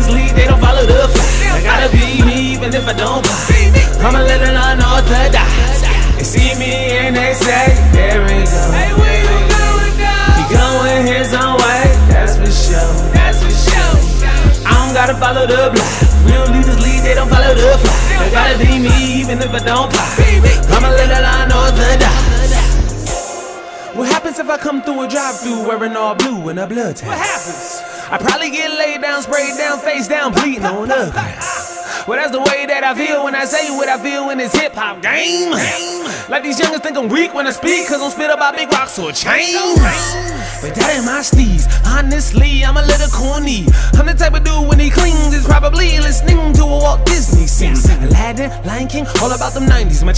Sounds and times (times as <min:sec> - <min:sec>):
Tender music: 0:00.0 - 0:50.1.